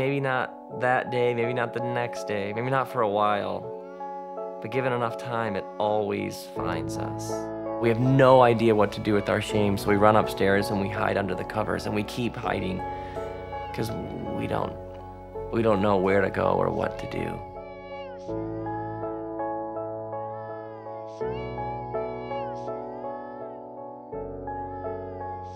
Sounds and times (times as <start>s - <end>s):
Speech: 0.0s - 3.7s, 4.6s - 12.9s, 13.8s - 14.8s, 15.5s - 17.4s
Music: 0.0s - 25.5s.